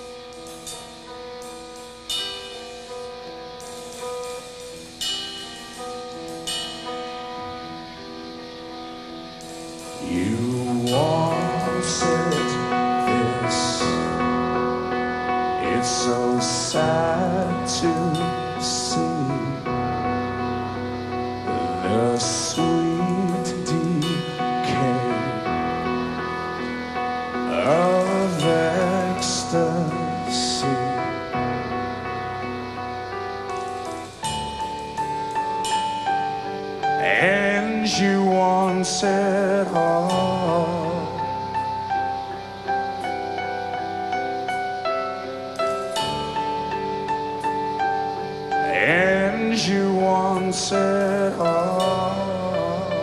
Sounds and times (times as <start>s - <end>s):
Music: 0.0s - 53.0s.